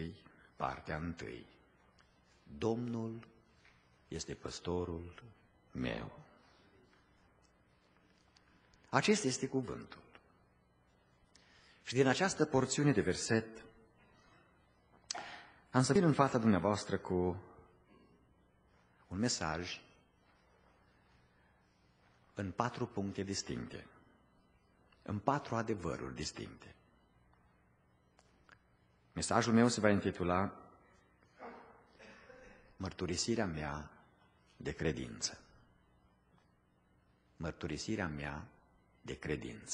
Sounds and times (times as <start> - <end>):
Speech: 0.0 - 1.6, 2.5 - 3.4, 4.1 - 6.9, 8.9 - 10.1, 11.9 - 13.7, 15.7 - 17.7, 19.1 - 20.0, 22.4 - 24.0, 25.0 - 26.8, 29.2 - 30.8, 32.8 - 34.0, 34.6 - 35.5, 37.4 - 39.7.